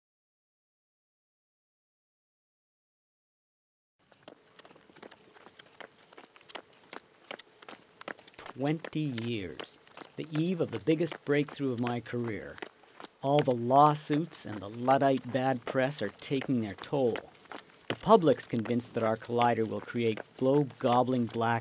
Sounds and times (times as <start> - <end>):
Run: 4.0 - 21.6
Speech: 8.4 - 12.6, 13.2 - 17.3, 18.0 - 21.6.